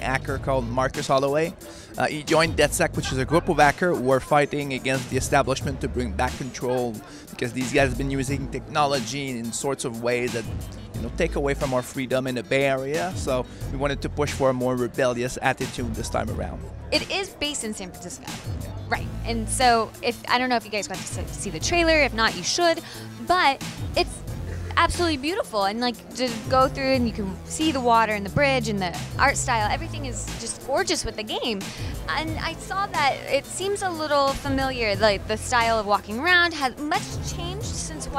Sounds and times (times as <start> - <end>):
Music: 0.0 - 38.1
Speech: 2.0 - 10.4, 24.8 - 38.1.